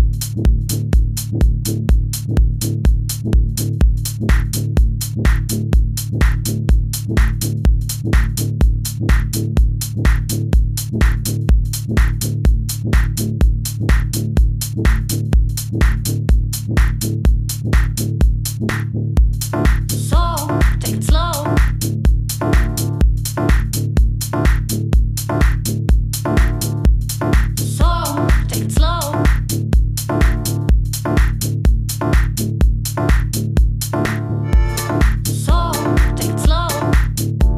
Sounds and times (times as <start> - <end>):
Music: 0.0 - 37.5.